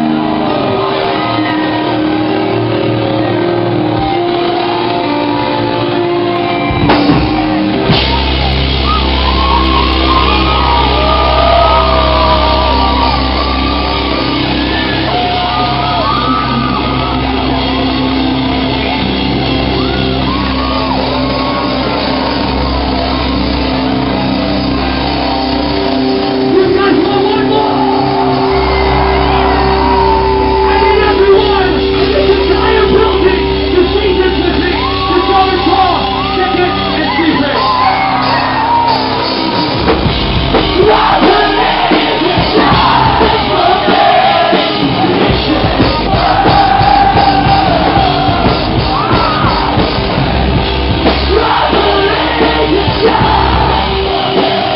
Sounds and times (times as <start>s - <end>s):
Music: 0.0s - 54.7s.